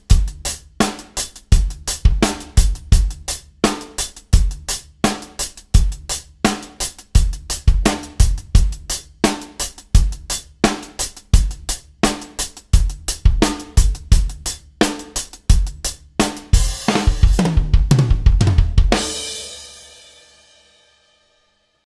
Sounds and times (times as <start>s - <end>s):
Snare drum: 0.0s - 3.0s, 3.7s - 4.5s, 5.1s - 10.1s, 10.7s - 19.4s
Cymbal: 0.0s - 17.7s, 18.9s - 21.8s
Drum kit: 0.0s - 21.0s.